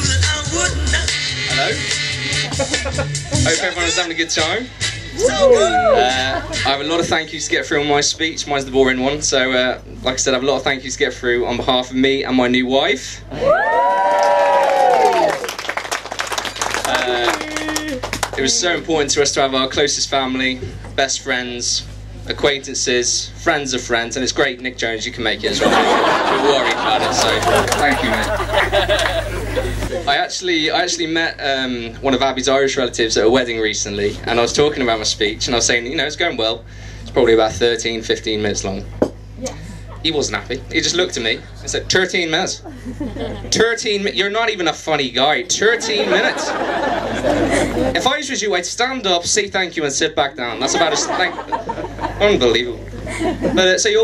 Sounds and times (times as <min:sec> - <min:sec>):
Male speech, man speaking: 0:01.5 - 0:01.8, 0:03.4 - 0:13.3, 0:16.8 - 0:28.4, 0:30.1 - 0:38.9, 0:40.0 - 0:42.6, 0:43.5 - 0:46.5, 0:47.9 - 0:51.5, 0:52.2 - 0:54.0.